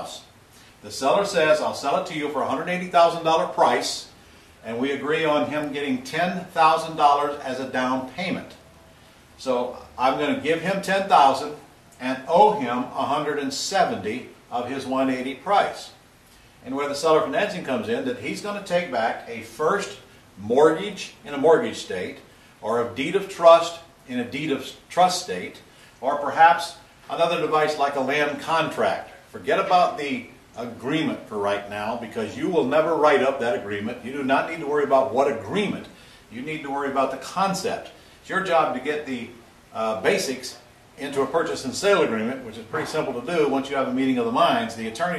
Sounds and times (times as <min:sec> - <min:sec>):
Speech: 0:00.0 - 0:08.6, 0:09.4 - 0:16.0, 0:16.6 - 0:45.1.